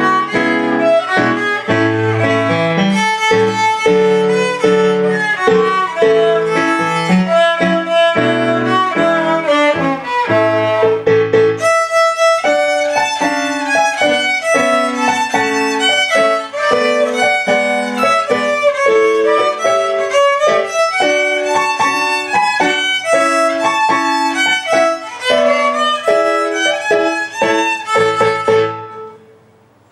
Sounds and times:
Violin, fiddle: 0:00.0 - 0:29.2.

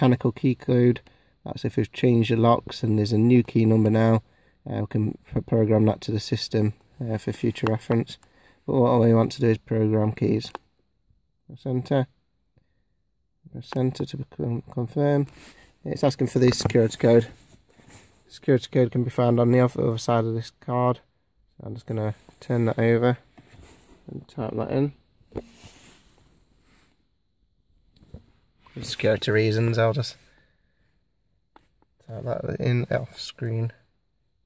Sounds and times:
Speech: 0:00.0 - 0:10.6, 0:11.5 - 0:12.2, 0:13.5 - 0:17.4, 0:18.3 - 0:23.3, 0:24.1 - 0:25.0, 0:28.7 - 0:30.3, 0:32.0 - 0:33.9.

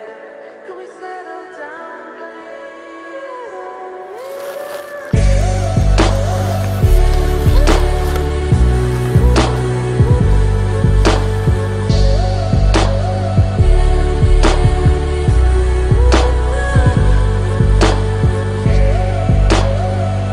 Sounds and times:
Music: 0:00.0 - 0:20.3.

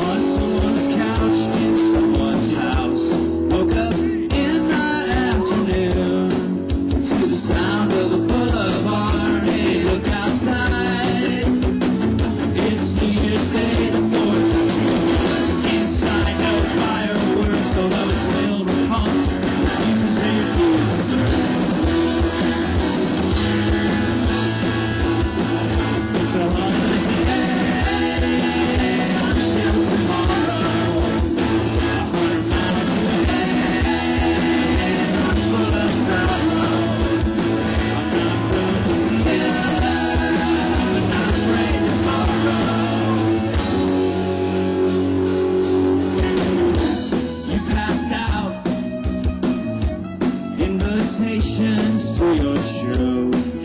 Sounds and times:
Rhythm and blues: 0:00.0 - 0:53.6.

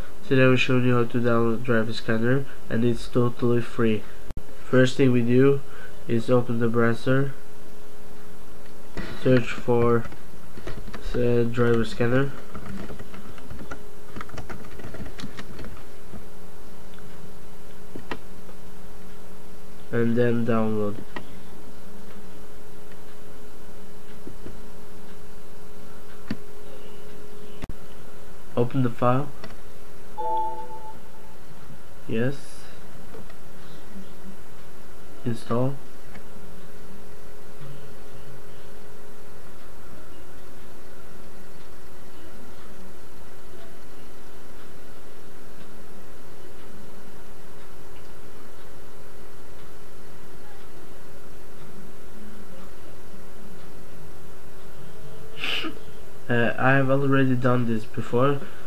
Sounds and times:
Inside, small room: 0:00.0 - 0:58.6
Speech: 0:00.2 - 0:07.4, 0:09.1 - 0:10.1, 0:11.0 - 0:12.4, 0:19.9 - 0:21.2, 0:28.6 - 0:29.4, 0:32.1 - 0:32.8, 0:35.2 - 0:35.9, 0:55.0 - 0:58.5.

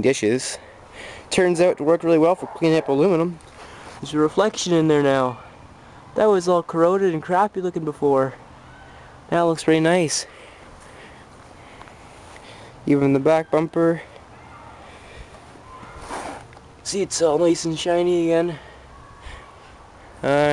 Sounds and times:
Speech: 0:01.3 - 0:03.4, 0:06.2 - 0:08.4, 0:16.8 - 0:18.6, 0:20.2 - 0:20.5.

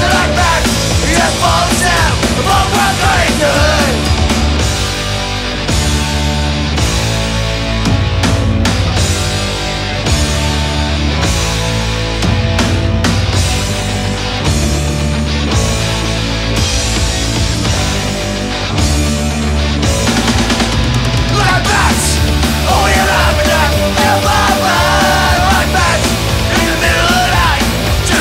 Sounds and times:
Progressive rock: 0:00.0 - 0:28.2.

